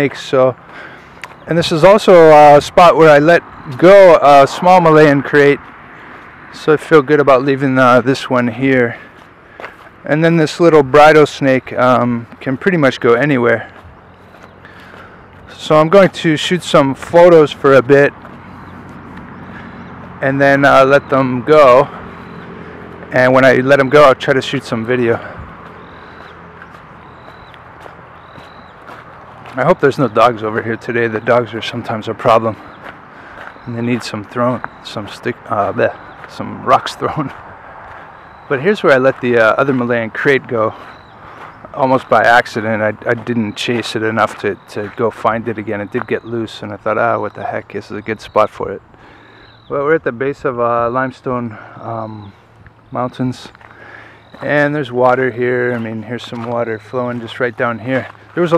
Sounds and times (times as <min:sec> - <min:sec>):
Speech: 0:00.0 - 0:00.6, 0:01.4 - 0:05.6, 0:06.5 - 0:09.1, 0:10.0 - 0:13.8, 0:15.5 - 0:18.2, 0:20.2 - 0:22.0, 0:23.0 - 0:25.4, 0:29.5 - 0:32.7, 0:33.6 - 0:37.4, 0:38.5 - 0:40.9, 0:41.7 - 0:48.8, 0:49.7 - 0:53.6, 0:54.4 - 0:58.5
Outside, rural or natural: 0:00.0 - 0:58.5.